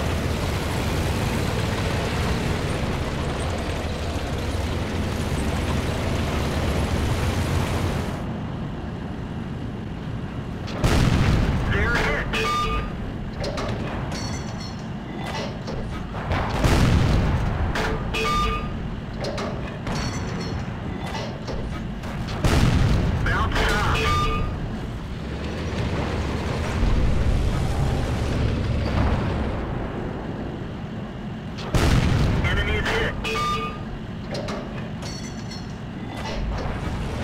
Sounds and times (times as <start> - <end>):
Speech: 11.7 - 12.9, 23.2 - 24.4, 32.4 - 33.7.